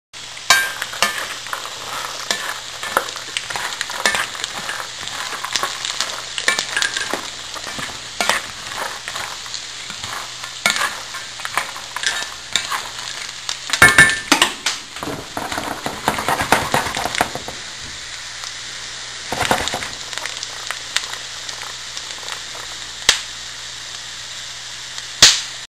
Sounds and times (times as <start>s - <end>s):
Frying (food): 0.2s - 25.7s.